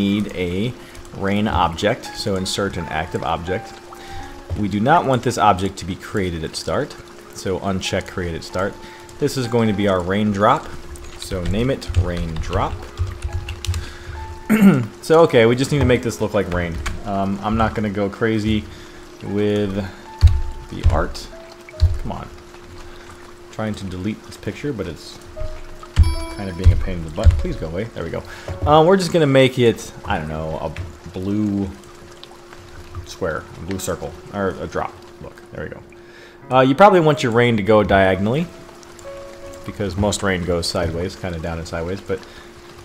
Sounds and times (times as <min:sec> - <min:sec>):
Raindrop: 0:00.0 - 0:42.8.